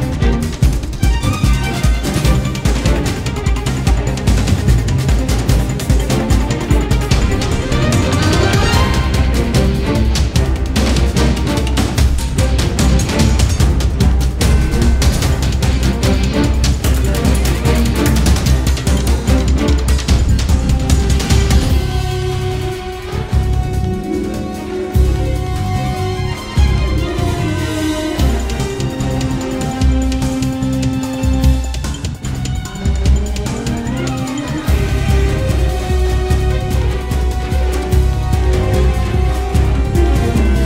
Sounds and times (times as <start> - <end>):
Music: 0.0 - 40.6.